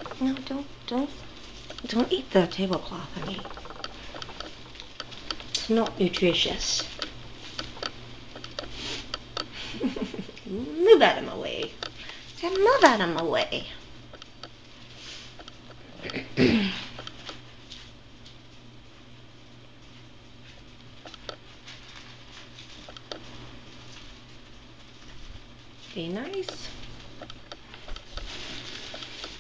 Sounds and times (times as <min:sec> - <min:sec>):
Speech: 0:00.2 - 0:01.2, 0:01.8 - 0:03.4, 0:05.6 - 0:06.9, 0:10.5 - 0:11.7, 0:12.4 - 0:13.8, 0:25.9 - 0:26.8.